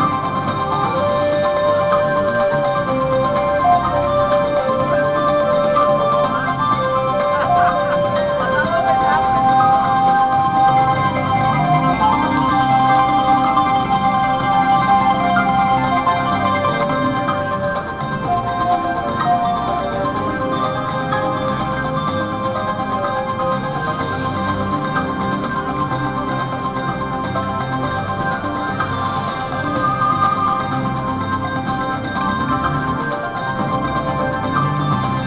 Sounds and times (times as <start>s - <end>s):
Music: 0.0s - 35.2s.